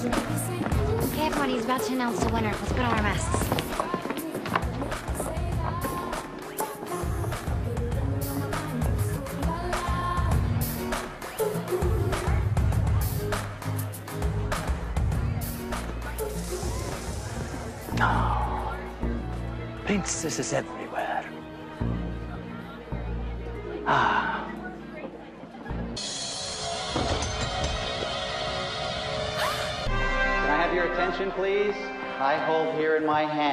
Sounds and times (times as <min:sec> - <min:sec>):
Music: 0:00.0 - 0:33.5
Male speech, man speaking: 0:19.8 - 0:21.3, 0:30.5 - 0:33.5.